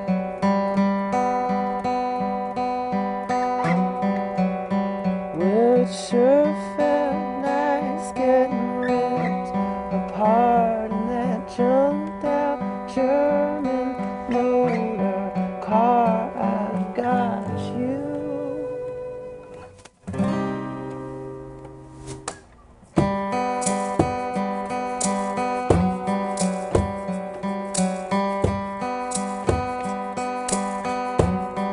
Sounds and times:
Music: 0.0s - 31.7s.

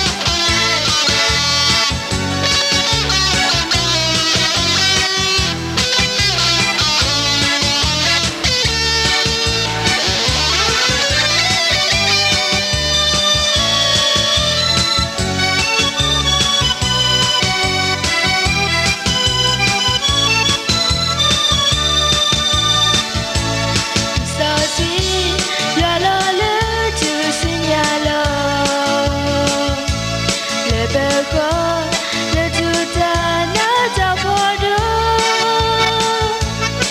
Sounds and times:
Music: 0.0s - 36.9s.

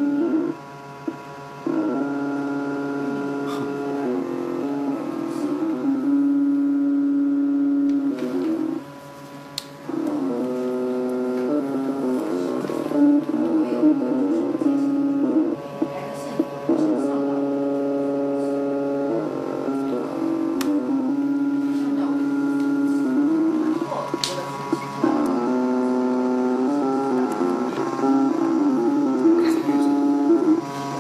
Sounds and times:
Speech: 15.8s - 17.5s, 21.7s - 25.4s, 29.4s - 30.1s.

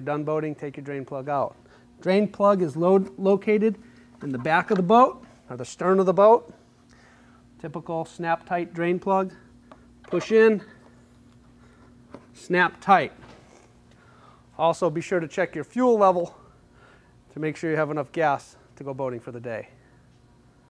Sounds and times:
Speech: 0.0s - 6.6s, 7.6s - 9.5s, 10.1s - 10.8s, 12.4s - 13.2s, 14.6s - 16.4s, 17.3s - 19.8s.

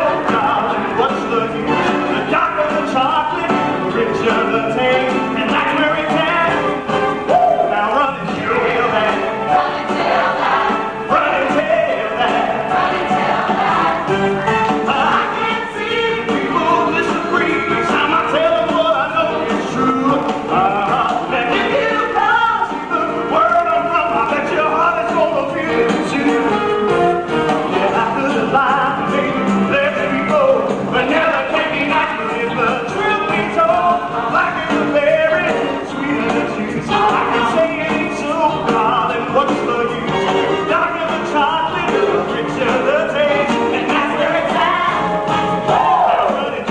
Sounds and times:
Music: 0.0s - 46.7s.

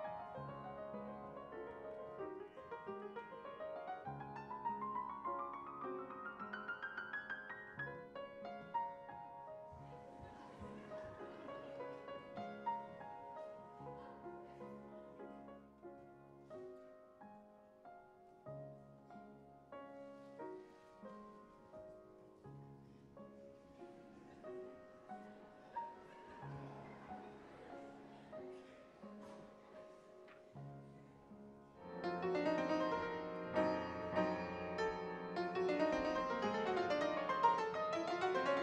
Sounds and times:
New-age music: 31.8s - 38.6s.

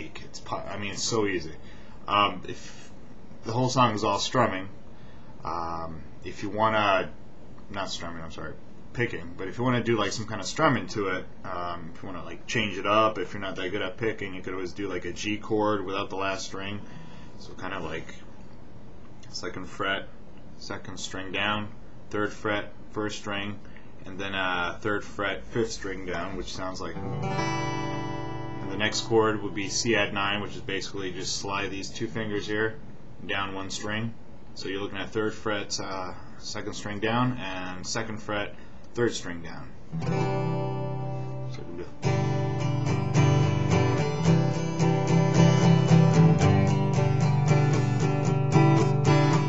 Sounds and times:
Speech: 0.0s - 4.8s, 5.4s - 18.3s, 19.2s - 27.0s, 28.6s - 39.8s, 41.4s - 42.0s.

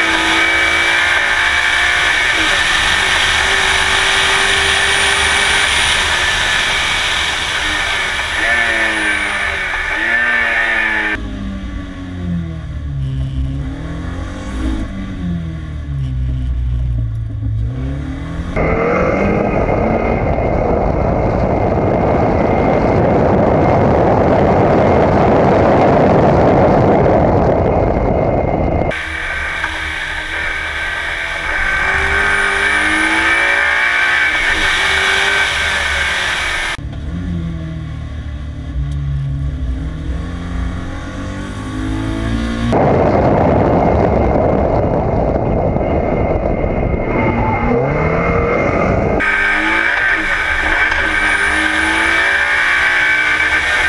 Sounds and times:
Race car, auto racing: 0.0s - 53.8s.

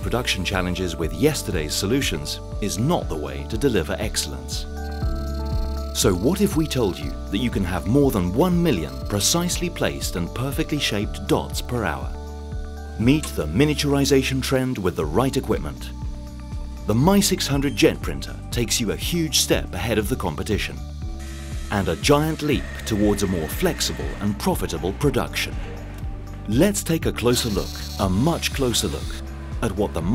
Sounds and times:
Speech: 0.0s - 4.7s, 6.0s - 12.2s, 13.0s - 15.9s, 16.9s - 20.8s, 21.7s - 25.7s, 26.5s - 30.1s
Music: 0.0s - 30.1s.

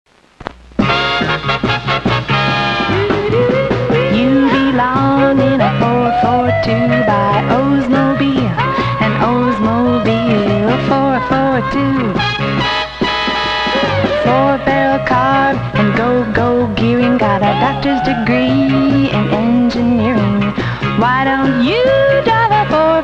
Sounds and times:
Music: 0.8s - 23.0s.

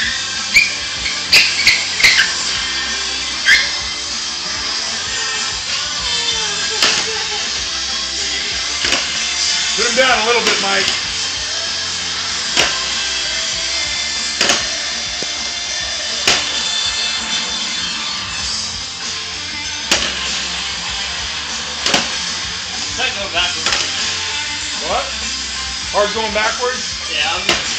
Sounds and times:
Music: 0.0s - 27.7s
Speech: 9.8s - 11.0s, 23.0s - 23.8s, 24.8s - 25.2s, 25.9s - 27.6s.

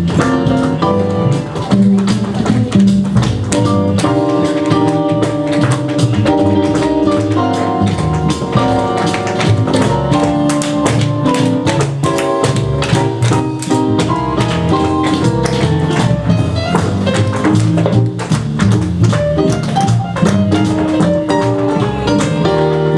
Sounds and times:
Percussion: 0.0s - 22.9s.

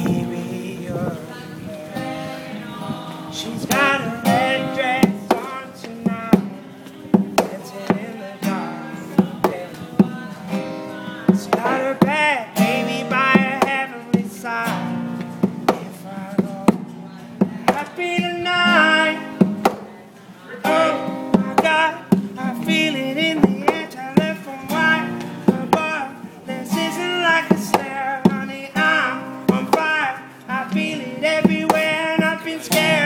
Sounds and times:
Male singing: 0.0s - 19.8s, 20.5s - 33.0s
Music: 0.0s - 33.0s.

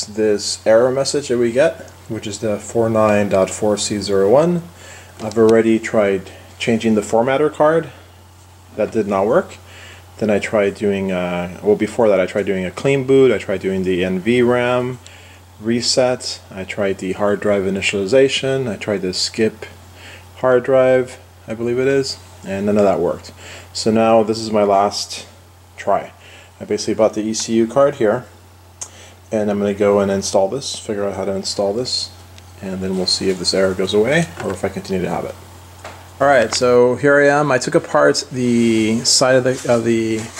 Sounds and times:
Speech: 0.0s - 8.0s, 8.7s - 15.0s, 15.6s - 19.8s, 20.4s - 28.4s, 29.3s - 35.4s, 36.2s - 40.3s.

